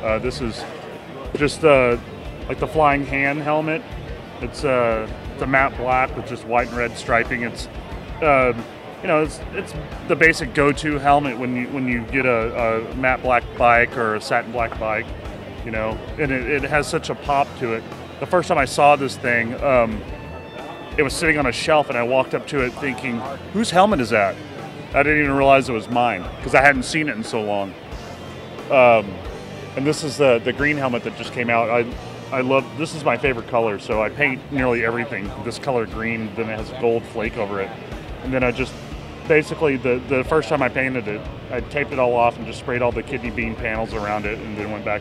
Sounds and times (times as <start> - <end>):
Speech: 0.0 - 3.8, 4.4 - 20.1, 21.0 - 27.7, 28.7 - 29.2, 29.8 - 45.0
Music: 0.0 - 45.0.